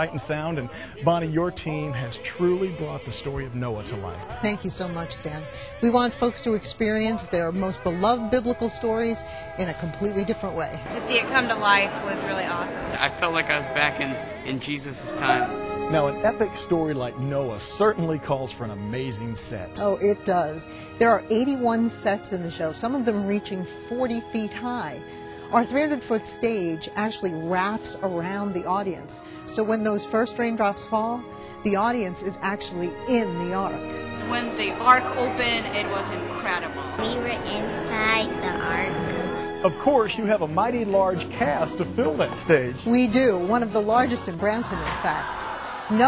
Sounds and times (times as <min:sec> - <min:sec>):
Speech: 0:00.0 - 0:12.3, 0:13.1 - 0:19.7
Music: 0:00.0 - 0:46.0.